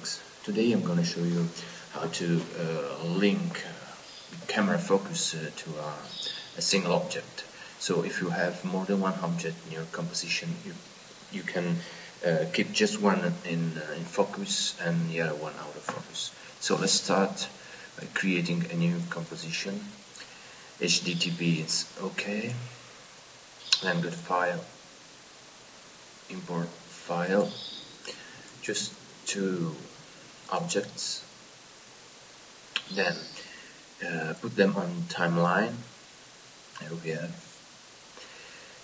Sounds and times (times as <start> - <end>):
Speech: 0.0 - 20.0, 20.8 - 22.8, 23.8 - 24.8, 26.3 - 31.3, 32.8 - 35.9, 36.8 - 37.5.